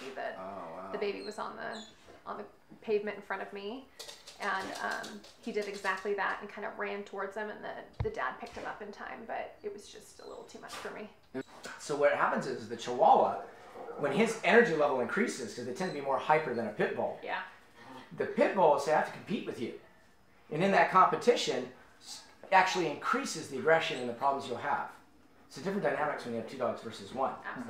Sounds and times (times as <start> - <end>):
Speech: 4.4 - 9.9.